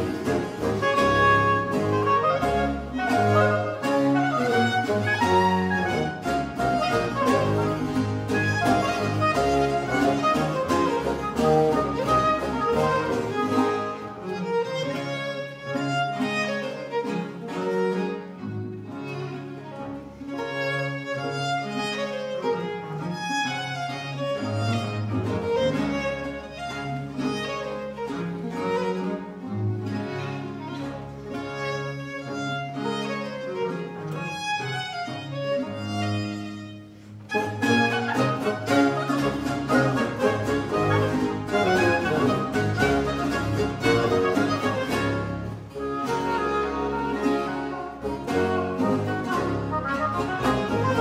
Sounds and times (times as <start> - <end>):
Cello: 0.0 - 51.0
Violin, fiddle: 0.0 - 51.0.